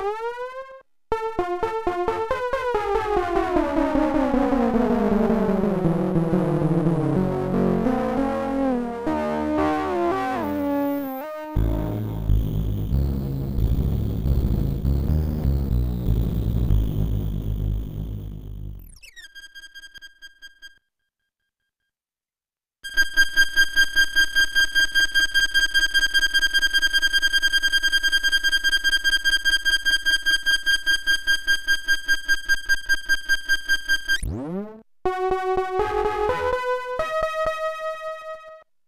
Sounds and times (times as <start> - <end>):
Music: 0.0 - 21.0, 25.2 - 38.7.